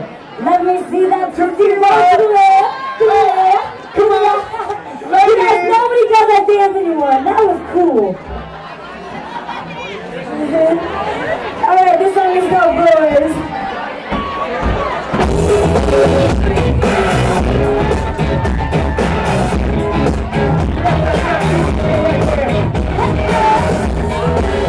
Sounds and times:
Speech: 0.4s - 8.2s, 11.6s - 13.6s
Music: 15.1s - 24.6s.

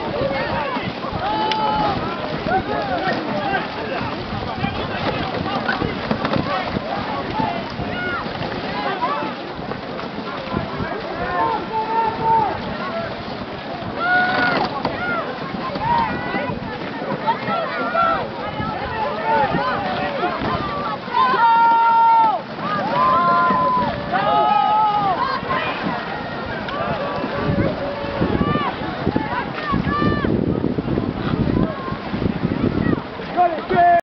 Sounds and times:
Speech: 0.0s - 9.5s, 10.2s - 13.2s, 14.0s - 23.5s, 31.6s - 34.0s
Boat, Water vehicle: 0.0s - 34.0s.

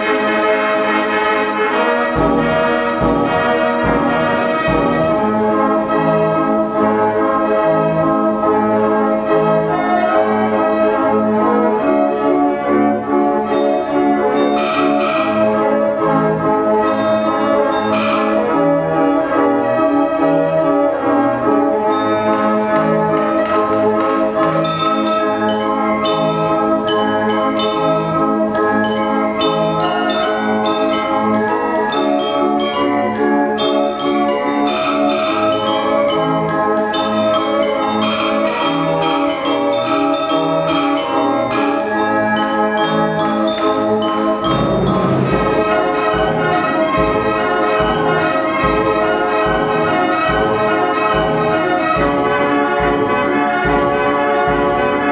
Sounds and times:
Music: 0.0s - 55.1s.

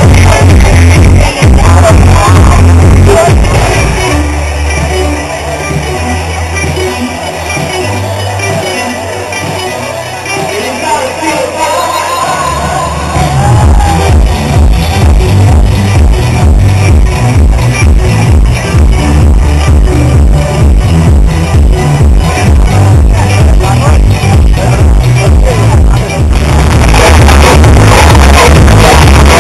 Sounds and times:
Music: 0.0s - 29.4s.

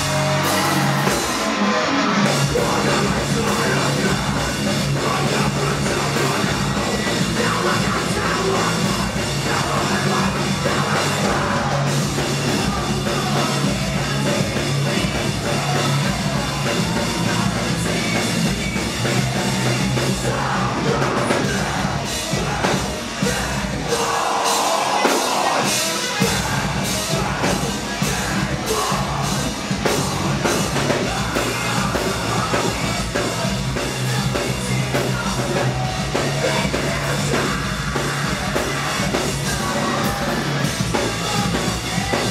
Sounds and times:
Punk rock: 0.0s - 42.3s
Singing: 0.0s - 42.3s.

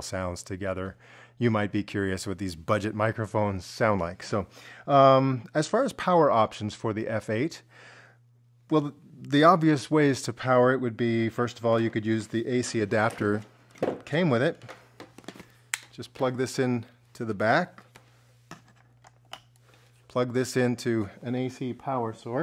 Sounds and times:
Speech: 0.0s - 7.6s, 8.7s - 14.7s, 16.0s - 17.8s, 20.1s - 22.4s.

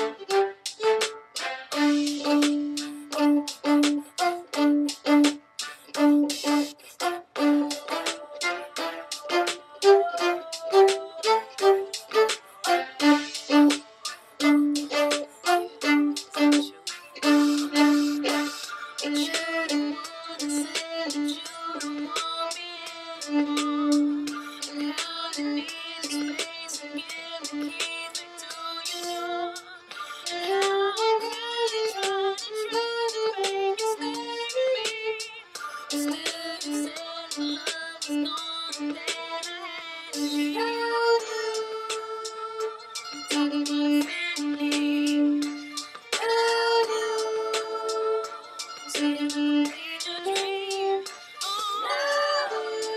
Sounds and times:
Violin, fiddle: 0.0s - 52.9s.

